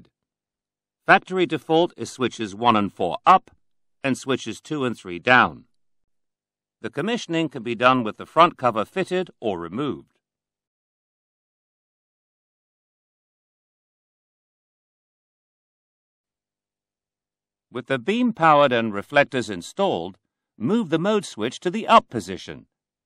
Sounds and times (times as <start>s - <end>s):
Narration, monologue: 1.0s - 10.2s, 17.7s - 22.8s.